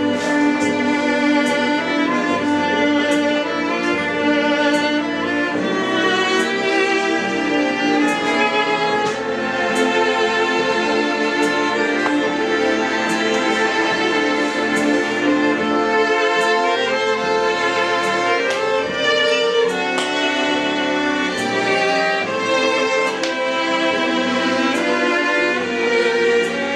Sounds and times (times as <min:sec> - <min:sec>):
Violin, fiddle: 0:00.0 - 0:26.7.